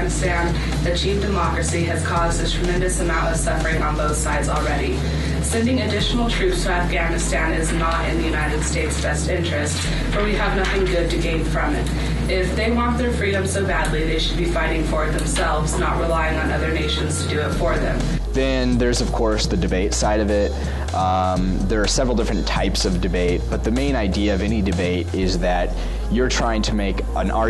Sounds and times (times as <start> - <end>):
Female speech, woman speaking: 0.0 - 18.1
Music: 0.0 - 27.4
Narration, monologue: 0.0 - 27.4.